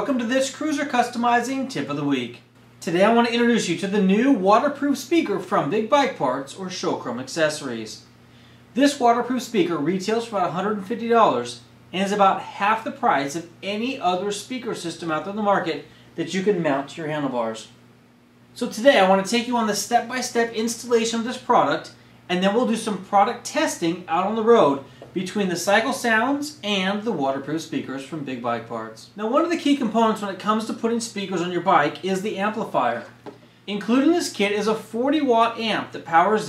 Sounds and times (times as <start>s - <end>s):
Speech: 0.0s - 8.1s, 8.8s - 17.8s, 18.6s - 36.4s.